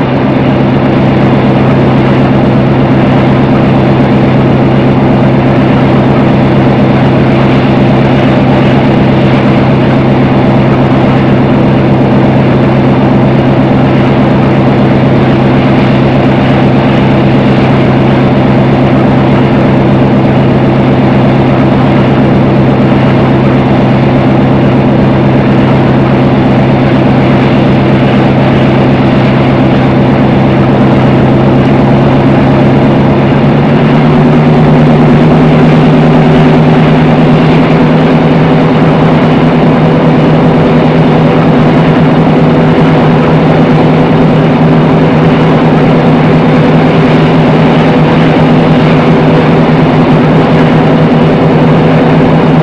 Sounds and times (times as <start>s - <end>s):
Train: 0.0s - 52.6s.